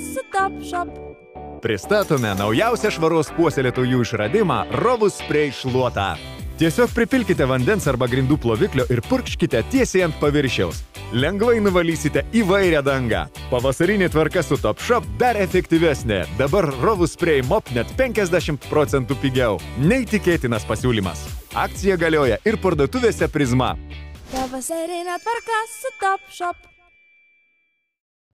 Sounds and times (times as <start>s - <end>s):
Speech: 0.0s - 0.9s, 1.6s - 23.8s, 24.4s - 26.6s
Music: 0.0s - 27.9s.